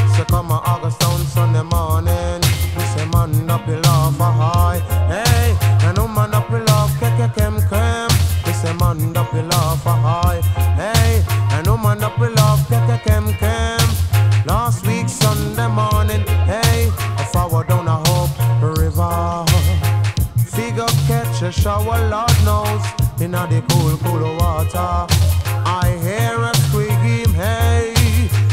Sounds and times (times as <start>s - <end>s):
Music: 0.0s - 28.5s.